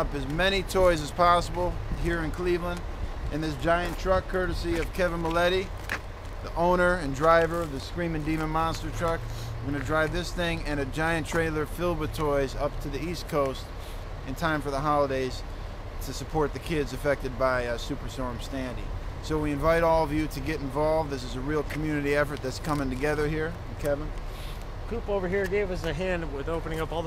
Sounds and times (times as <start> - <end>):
Speech: 0.0 - 5.8, 6.4 - 13.7, 14.3 - 15.4, 16.0 - 24.1, 24.9 - 27.0
Truck: 0.0 - 27.0.